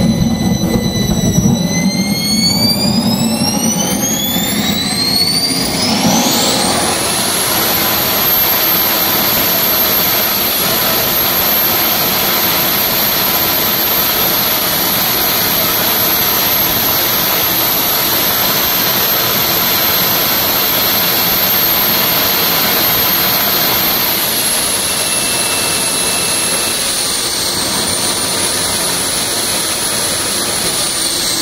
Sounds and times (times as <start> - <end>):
Jet engine: 0.0 - 31.4.